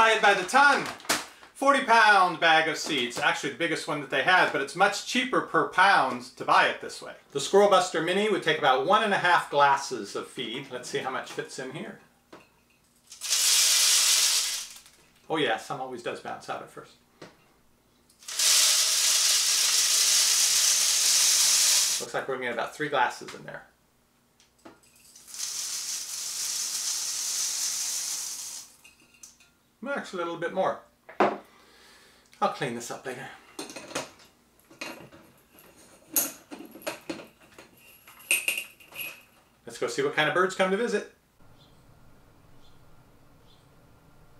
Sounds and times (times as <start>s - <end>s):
Speech: 0.0s - 1.0s, 1.6s - 12.0s, 15.3s - 17.0s, 22.0s - 23.7s, 29.8s - 30.9s, 32.4s - 33.4s, 39.6s - 41.2s
Inside, small room: 0.0s - 44.3s.